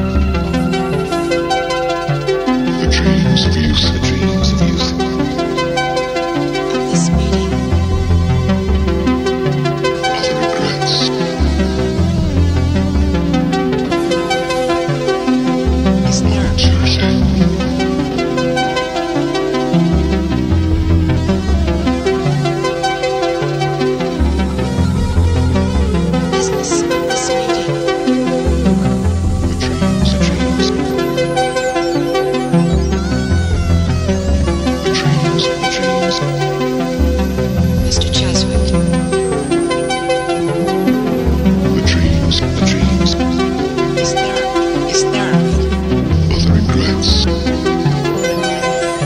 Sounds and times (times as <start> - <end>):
Music: 0.0 - 49.0
Speech: 2.7 - 5.3, 6.7 - 7.5, 10.0 - 11.2, 16.1 - 17.4, 26.3 - 27.8, 29.5 - 30.8, 34.9 - 36.4, 37.8 - 38.8, 41.7 - 48.0.